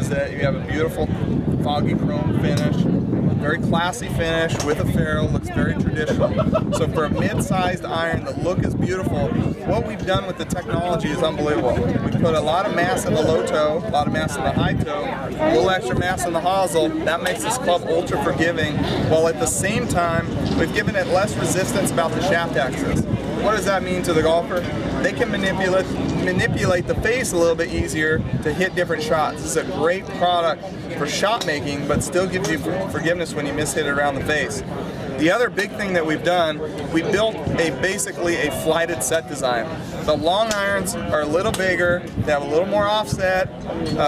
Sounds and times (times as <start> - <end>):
Speech: 0.0 - 44.0.